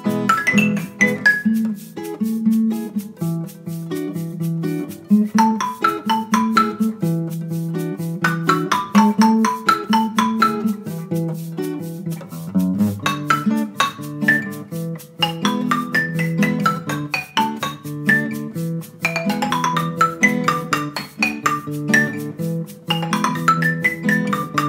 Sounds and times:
Marimba, xylophone: 0.0s - 3.6s, 5.0s - 11.4s, 12.4s - 24.6s
Inside, small room: 0.0s - 24.6s.

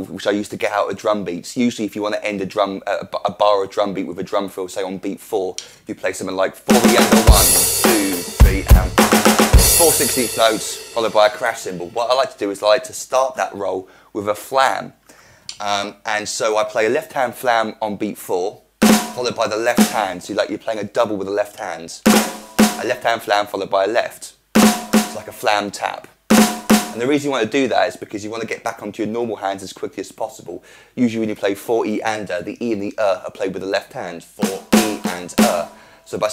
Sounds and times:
Speech: 0.0s - 22.1s, 22.8s - 24.4s, 25.0s - 26.2s, 26.9s - 36.3s
Music: 6.7s - 12.2s, 18.8s - 20.2s, 22.0s - 23.0s, 24.6s - 25.5s, 26.3s - 27.0s, 34.4s - 36.2s.

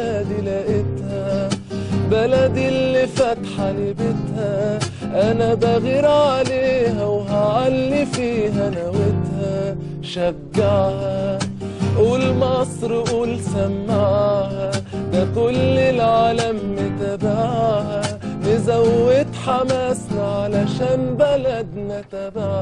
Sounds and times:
Guitar: 0.0s - 22.6s.

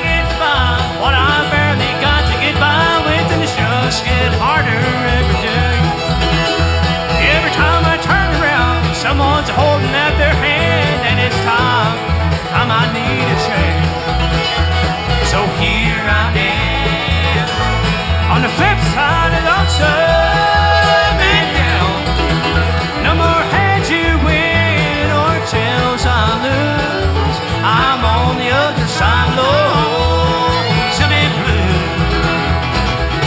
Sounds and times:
Music: 0.0s - 33.2s.

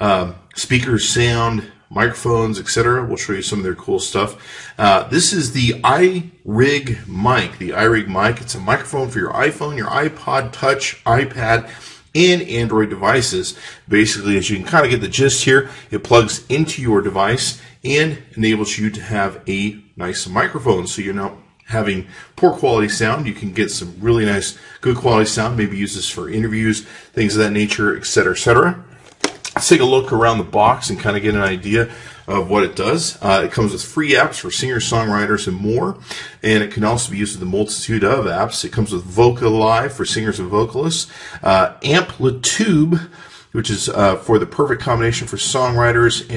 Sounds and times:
Speech: 0.0s - 46.3s.

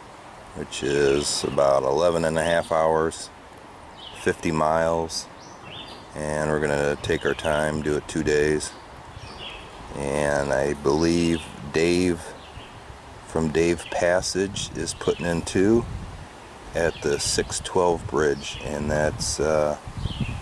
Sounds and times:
Speech: 0.6s - 3.3s, 4.2s - 5.3s, 6.2s - 8.8s, 9.9s - 12.4s, 13.3s - 15.9s, 16.8s - 19.8s.

